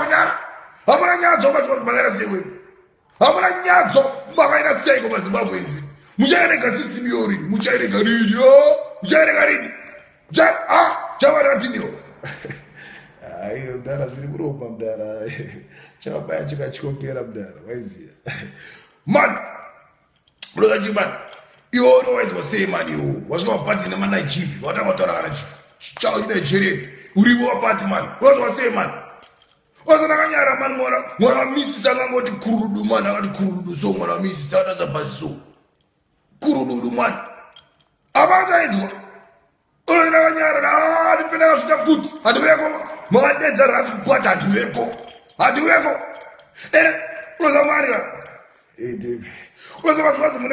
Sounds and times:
Speech: 0:00.0 - 0:02.6, 0:03.2 - 0:12.0, 0:13.2 - 0:18.4, 0:19.1 - 0:19.5, 0:20.4 - 0:21.2, 0:21.8 - 0:29.0, 0:29.8 - 0:35.5, 0:36.4 - 0:37.2, 0:38.2 - 0:39.1, 0:39.9 - 0:48.2, 0:48.8 - 0:50.5
Inside, small room: 0:00.0 - 0:50.5.

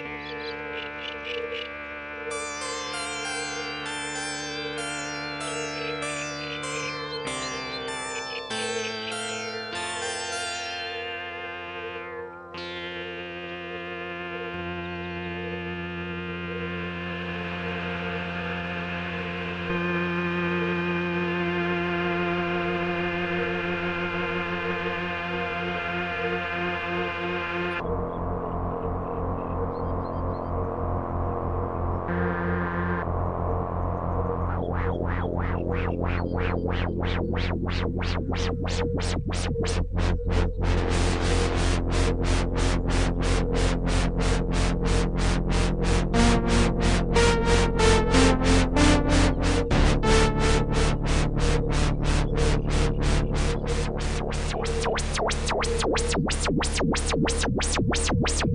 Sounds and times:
Synthesizer: 0:00.0 - 0:58.5.

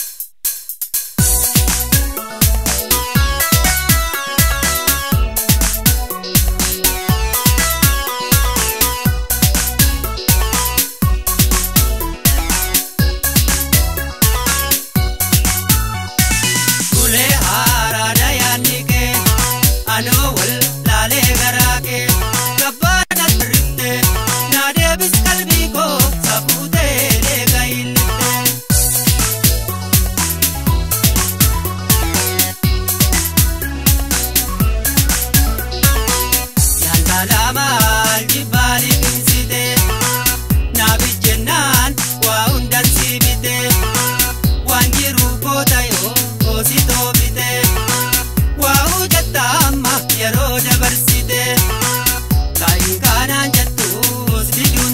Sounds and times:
Music: 0:00.0 - 0:54.9.

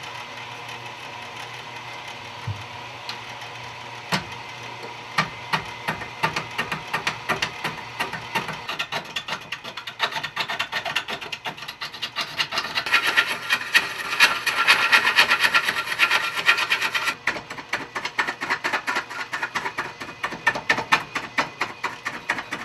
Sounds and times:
Filing (rasp): 0:05.2 - 0:22.6
Wood: 0:05.2 - 0:22.6
Rub: 0:08.4 - 0:22.6.

